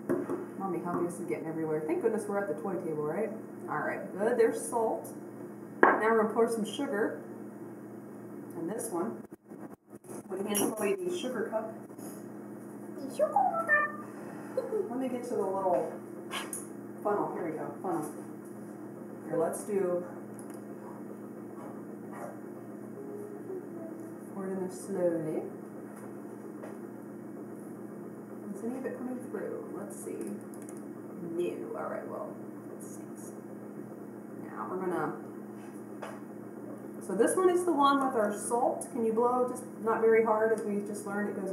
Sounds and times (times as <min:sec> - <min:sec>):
Inside, small room: 0:00.0 - 0:41.5
Child speech, kid speaking: 0:13.0 - 0:14.1, 0:23.0 - 0:24.2.